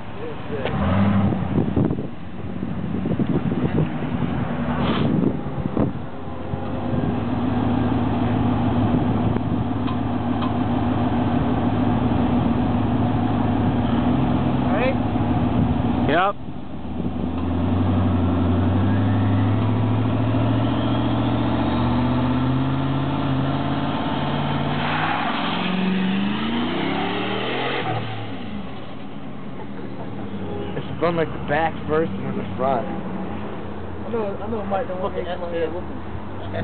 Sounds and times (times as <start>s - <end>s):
Car: 0.0s - 36.6s
Engine: 0.0s - 36.6s.